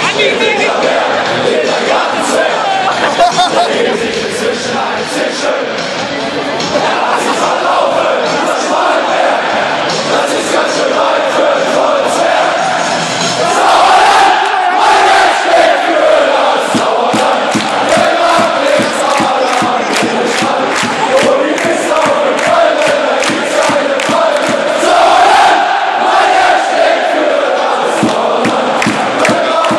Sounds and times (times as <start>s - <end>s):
Music: 0.0s - 29.7s.